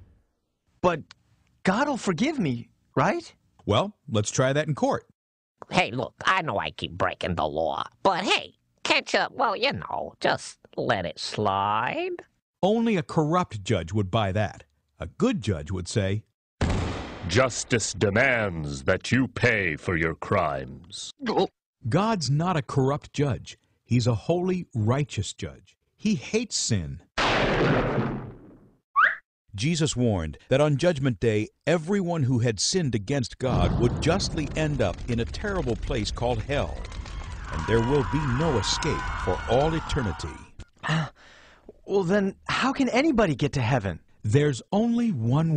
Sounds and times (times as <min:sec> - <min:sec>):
Speech: 0:00.8 - 0:16.3, 0:17.3 - 0:27.1, 0:29.6 - 0:36.8, 0:37.6 - 0:41.0, 0:41.8 - 0:45.5.